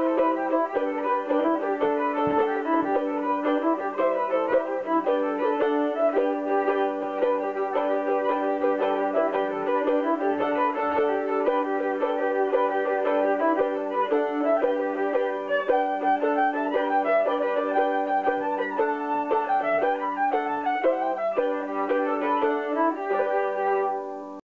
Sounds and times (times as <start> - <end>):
Pizzicato: 0.0 - 24.4.